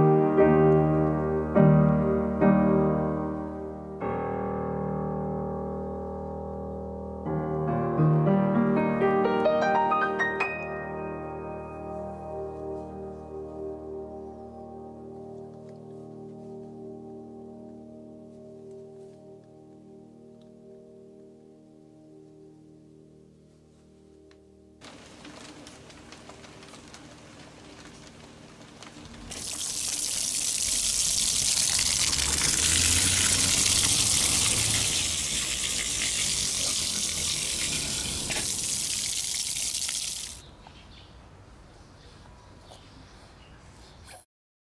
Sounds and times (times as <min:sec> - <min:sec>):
Water: 0:29.3 - 0:40.4.